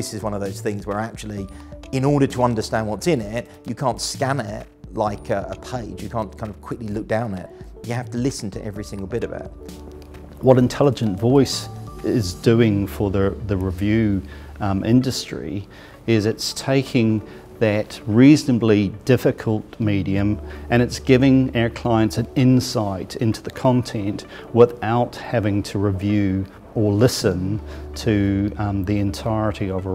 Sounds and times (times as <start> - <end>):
Male speech, man speaking: 0.0 - 9.6, 10.4 - 29.9
Music: 0.0 - 29.9.